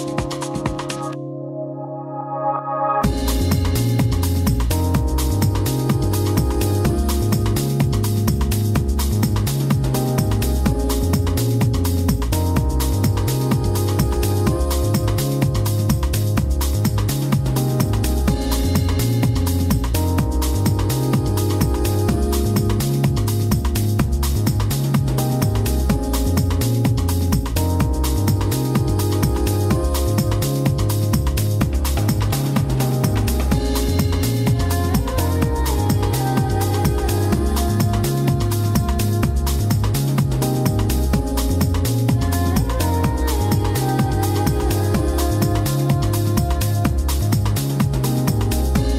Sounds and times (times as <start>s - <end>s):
Music: 0.0s - 48.9s.